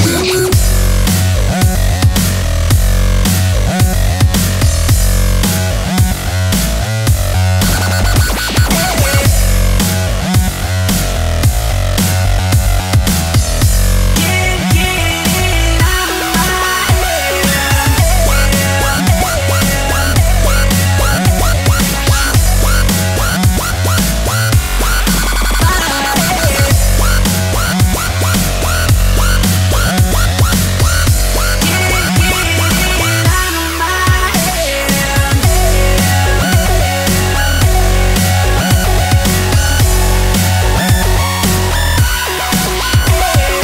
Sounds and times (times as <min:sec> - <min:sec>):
Dubstep: 0:00.0 - 0:43.6.